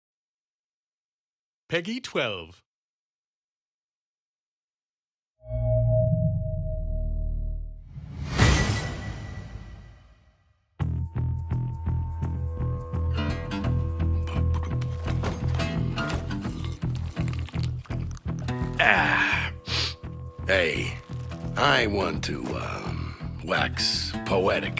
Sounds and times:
Speech: 1.7 - 2.7, 20.5 - 21.0, 21.6 - 24.7.

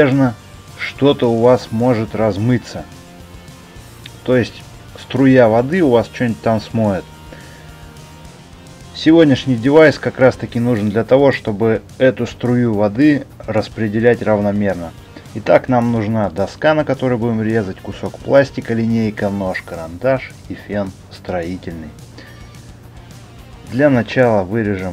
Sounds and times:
Speech: 0.0 - 2.9, 4.1 - 7.1, 8.9 - 22.0, 23.7 - 24.9
Music: 0.0 - 24.9.

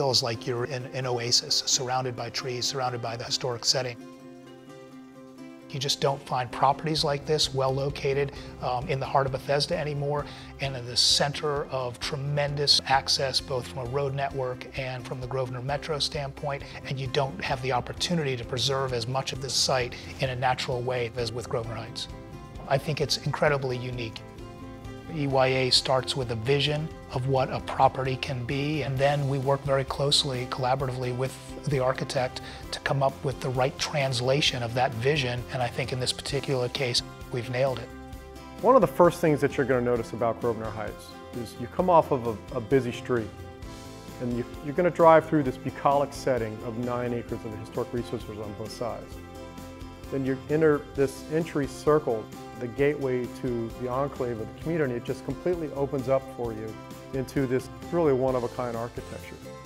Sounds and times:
Speech: 0.0 - 4.0, 5.7 - 24.2, 25.1 - 37.9, 38.6 - 43.3, 44.2 - 49.1, 50.1 - 59.5
Music: 0.0 - 59.6.

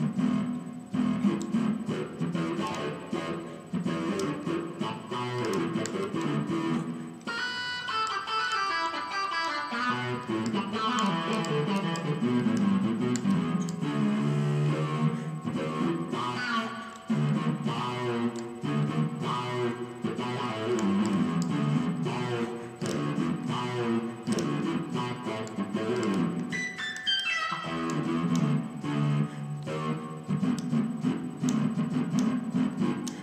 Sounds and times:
Music: 0.0 - 33.2.

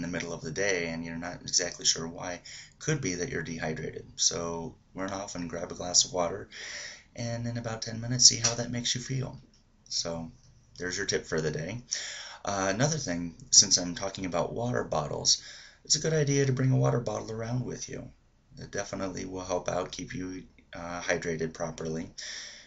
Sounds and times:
Speech: 0.0 - 6.6, 7.2 - 22.3.

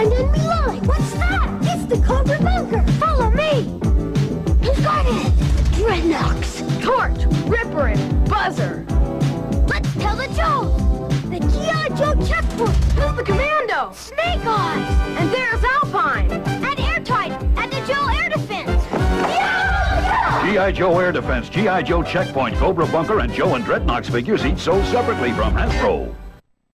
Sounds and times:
Music: 0.0 - 26.4
Speech: 20.4 - 26.2.

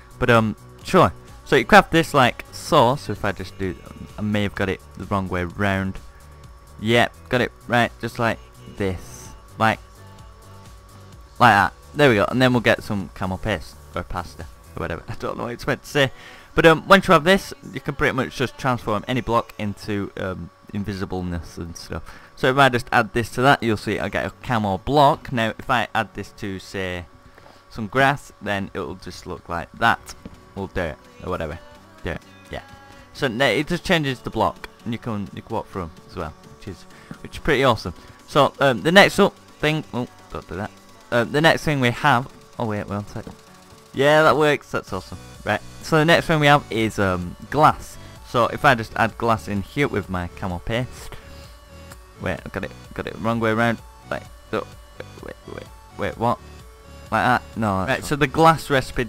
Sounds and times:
Music: 0.0 - 59.0
Speech: 0.2 - 6.0, 6.8 - 9.8, 11.4 - 27.1, 27.7 - 43.4, 44.0 - 51.1, 52.2 - 56.4, 57.1 - 59.0.

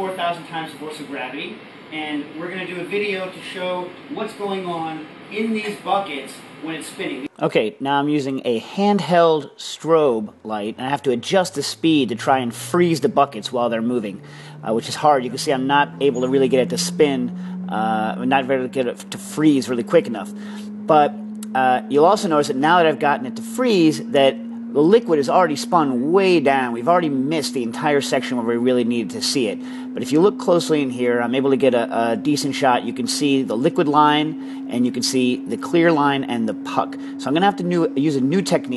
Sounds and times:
Speech: 0.0 - 20.3, 20.9 - 38.7.

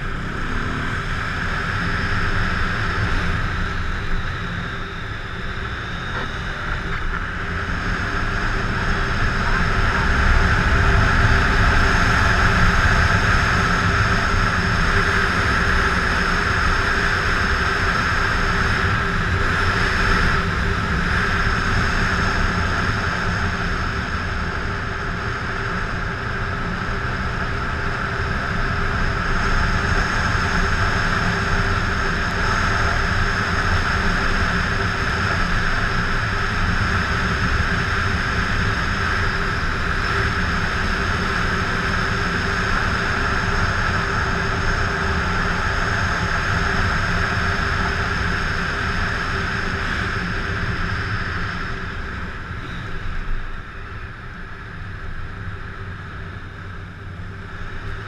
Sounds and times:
Motorcycle: 0.0 - 58.0.

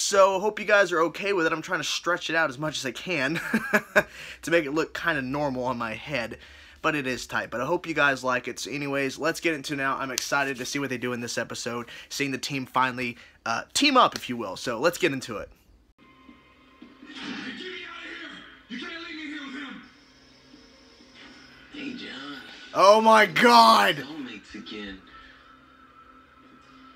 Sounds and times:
Speech: 0.0 - 3.4, 4.4 - 15.6, 22.3 - 25.0.

